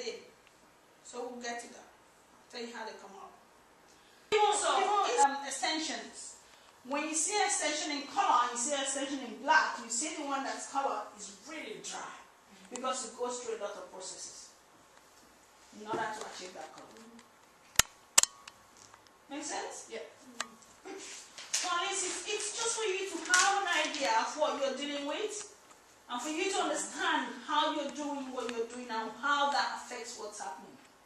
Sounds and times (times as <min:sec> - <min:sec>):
Speech: 0:00.0 - 0:00.4, 0:01.0 - 0:03.4, 0:04.4 - 0:14.6, 0:15.7 - 0:17.2, 0:19.3 - 0:30.9.